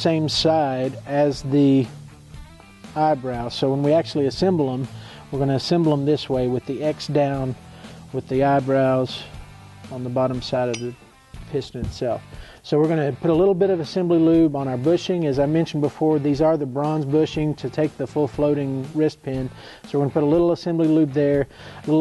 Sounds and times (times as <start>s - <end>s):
Speech: 0.0s - 1.9s, 3.0s - 9.3s, 9.9s - 22.0s
Music: 0.0s - 22.0s.